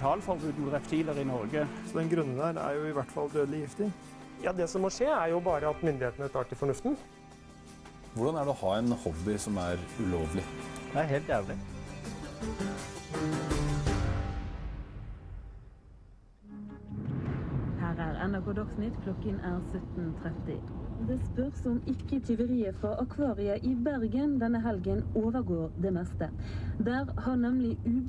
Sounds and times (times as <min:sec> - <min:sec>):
Music: 0:00.0 - 0:20.4
Outside, urban or manmade: 0:14.2 - 0:28.0.